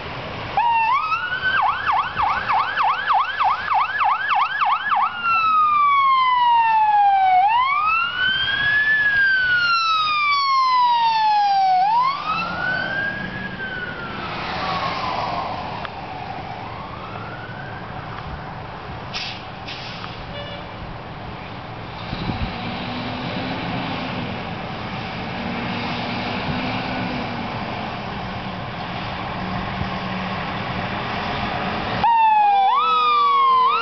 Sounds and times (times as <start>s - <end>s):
Truck: 0.0s - 33.8s
Ambulance (siren): 0.6s - 18.7s, 32.0s - 33.8s.